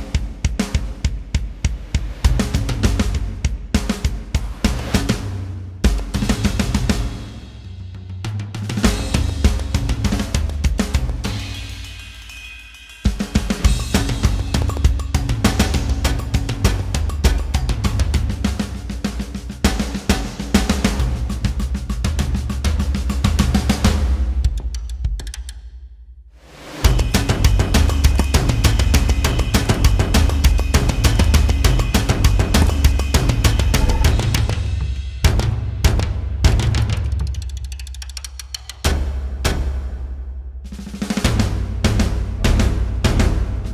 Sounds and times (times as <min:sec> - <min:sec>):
Music: 0:00.0 - 0:43.7.